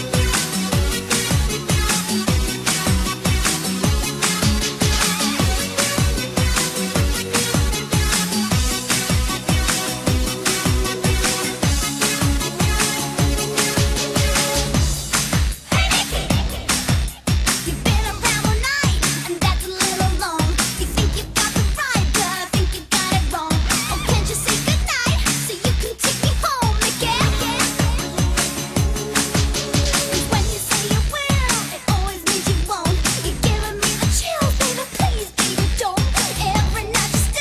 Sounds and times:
Music: 0.0 - 37.4.

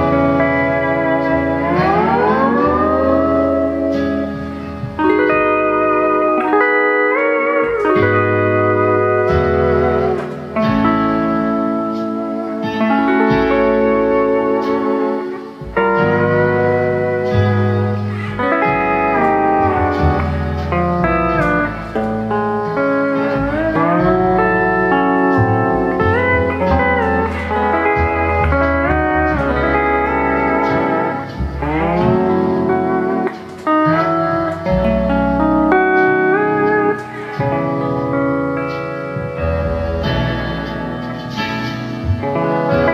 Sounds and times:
Steel guitar, slide guitar: 0.0 - 42.9.

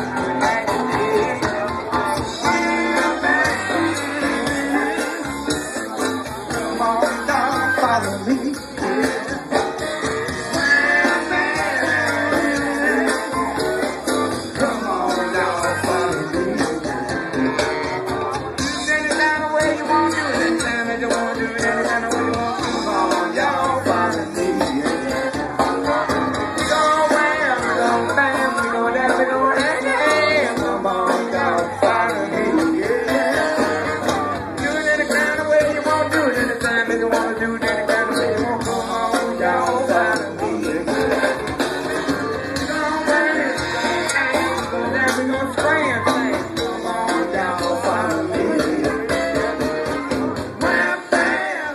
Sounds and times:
Music of Latin America: 0.0 - 51.7.

